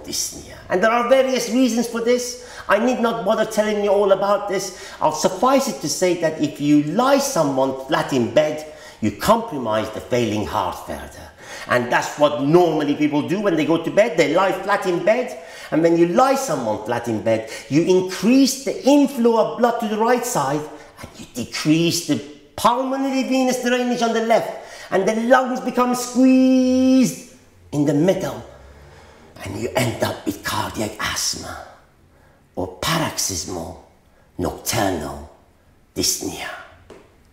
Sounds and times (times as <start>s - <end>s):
Speech: 0.0s - 28.5s, 29.4s - 31.8s, 32.6s - 35.4s, 36.0s - 36.8s
Inside, small room: 0.0s - 37.3s.